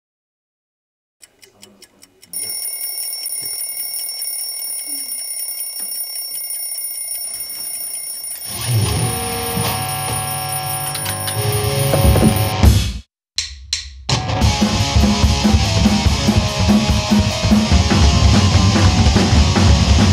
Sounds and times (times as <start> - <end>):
Alarm clock: 2.3 - 12.6.